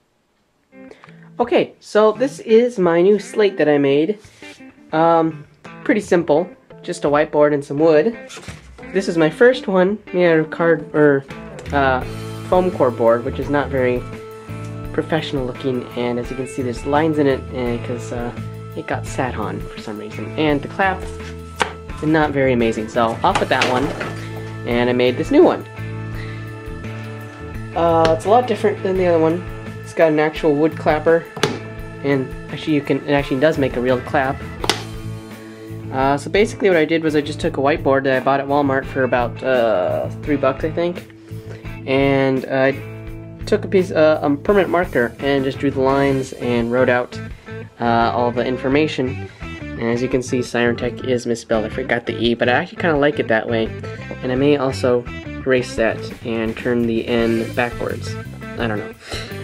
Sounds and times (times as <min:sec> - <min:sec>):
Music: 0:00.6 - 0:59.4
Speech: 0:01.4 - 0:04.2, 0:04.9 - 0:08.2, 0:09.0 - 0:14.1, 0:14.9 - 0:21.1, 0:22.0 - 0:25.6, 0:27.8 - 0:31.3, 0:32.0 - 0:34.4, 0:35.9 - 0:41.0, 0:41.9 - 0:42.8, 0:43.5 - 0:47.2, 0:47.8 - 0:49.2, 0:49.8 - 0:59.2.